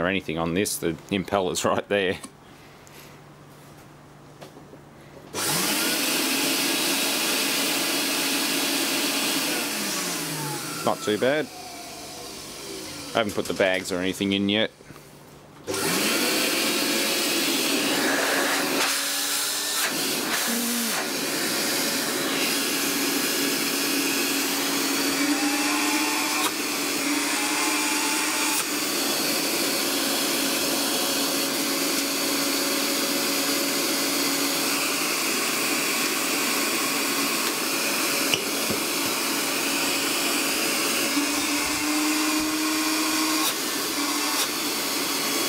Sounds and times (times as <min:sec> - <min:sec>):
Speech: 0:00.0 - 0:02.3, 0:10.8 - 0:11.5, 0:13.1 - 0:14.8
Vacuum cleaner: 0:05.3 - 0:13.2, 0:15.7 - 0:45.4.